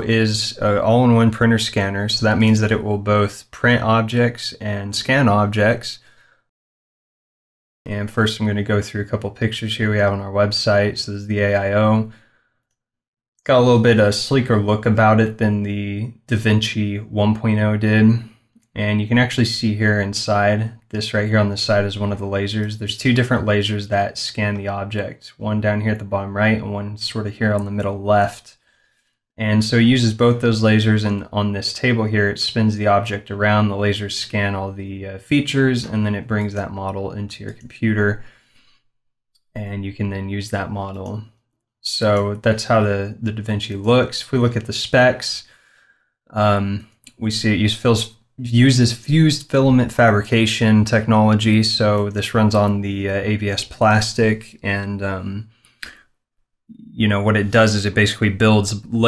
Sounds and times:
Speech: 0.0 - 6.1, 7.9 - 12.2, 13.5 - 28.6, 29.4 - 38.3, 39.5 - 45.5, 46.3 - 56.0, 56.7 - 59.0.

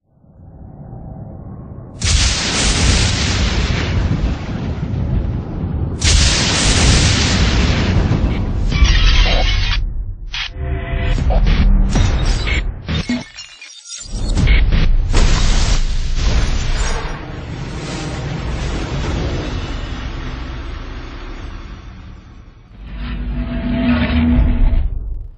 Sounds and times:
Sound effect: 0.0 - 25.3.

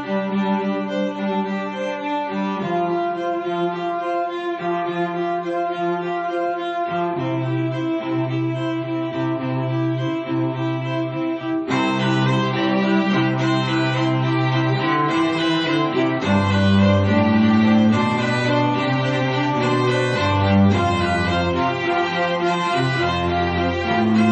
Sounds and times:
Cello: 0.0 - 24.3
Violin, fiddle: 0.0 - 24.3
Double bass: 2.6 - 24.3.

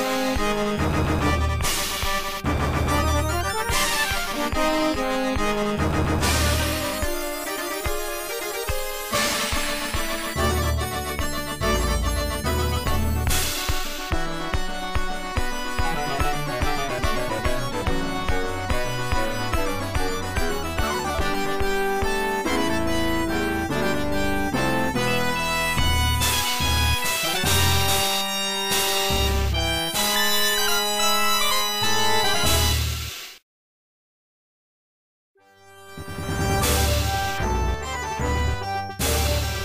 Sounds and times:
Video game music: 0.0 - 33.1, 35.4 - 39.6.

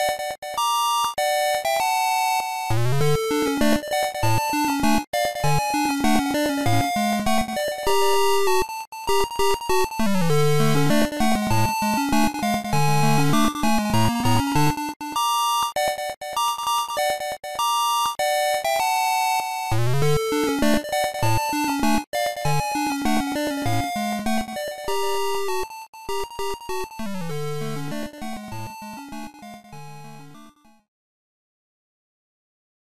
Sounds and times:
Video game music: 0.0 - 30.8.

